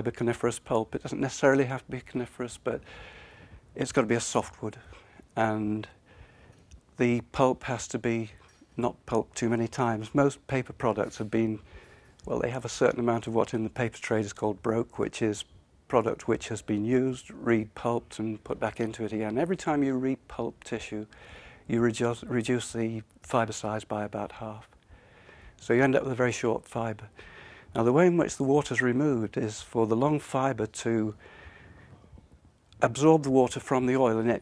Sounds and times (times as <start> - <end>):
Speech: 0.0 - 2.9, 3.8 - 6.0, 7.0 - 11.7, 12.3 - 24.8, 25.6 - 31.2, 32.8 - 34.4.